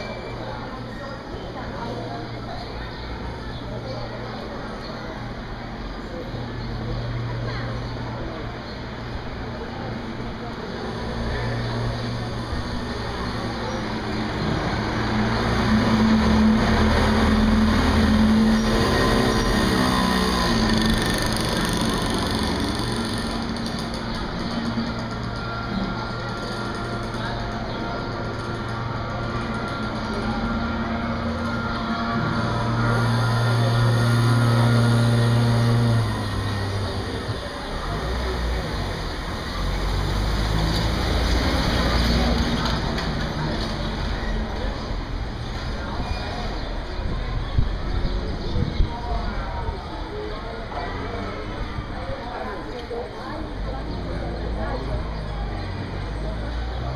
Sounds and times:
Outside, urban or manmade: 0:00.0 - 0:56.9.

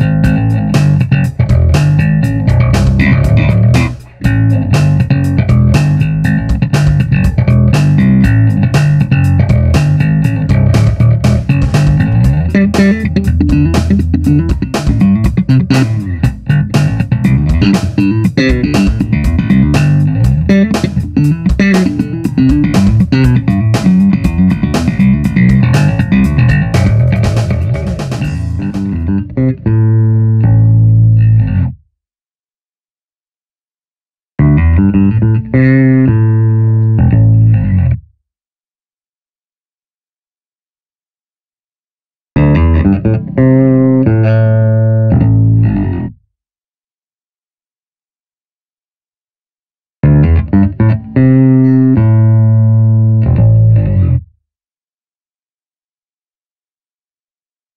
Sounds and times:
Guitar: 0:00.0 - 0:31.8, 0:34.4 - 0:38.0, 0:42.4 - 0:46.2, 0:50.0 - 0:54.3.

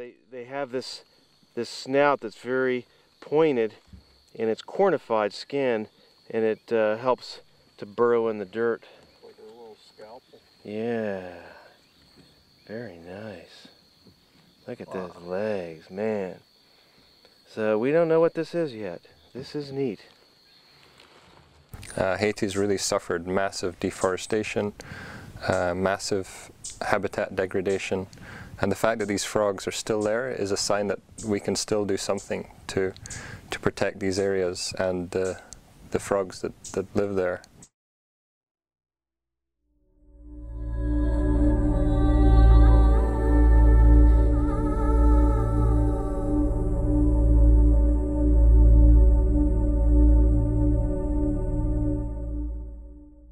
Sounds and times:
Speech: 0:00.0 - 0:01.0, 0:01.6 - 0:03.8, 0:04.4 - 0:11.6, 0:12.7 - 0:13.7, 0:14.7 - 0:16.4, 0:17.5 - 0:20.1, 0:21.9 - 0:24.8, 0:25.4 - 0:37.5.

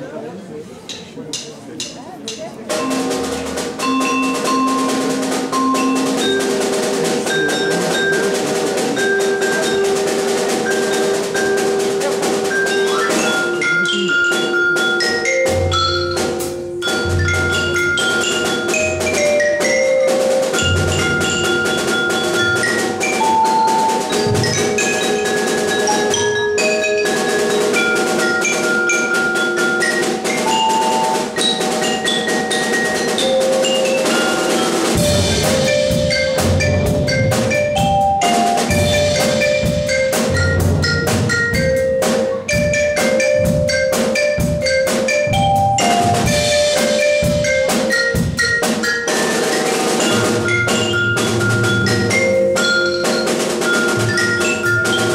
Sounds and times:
Drum kit: 0:00.9 - 0:55.1.

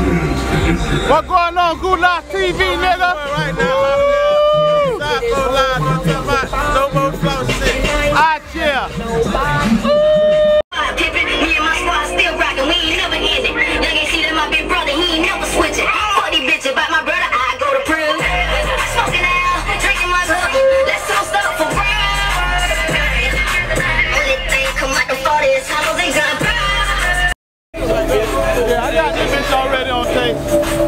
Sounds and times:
Music: 0:00.0 - 0:30.8.

